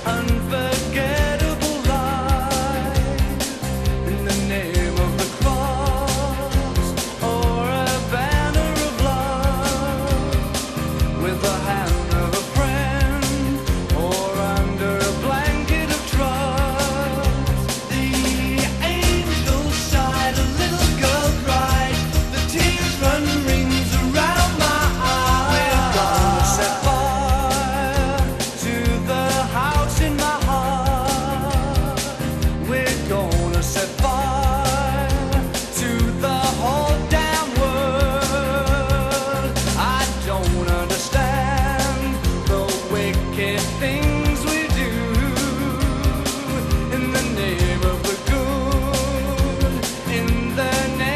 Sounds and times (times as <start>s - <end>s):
Music: 0.0s - 51.1s.